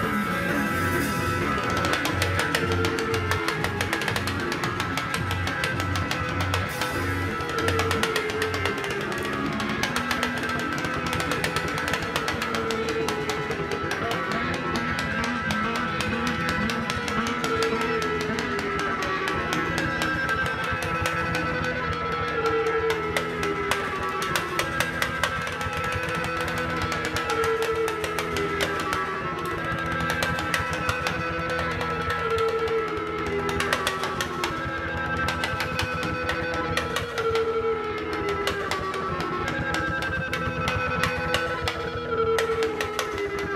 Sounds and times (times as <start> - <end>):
Guitar: 0.0 - 43.5.